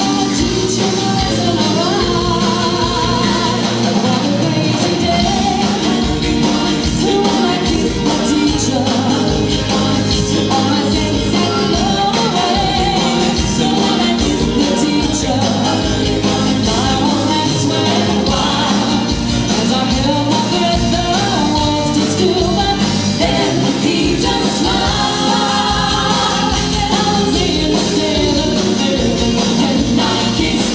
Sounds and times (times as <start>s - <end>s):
Singing: 0.0s - 30.7s
Vocal music: 0.0s - 30.7s.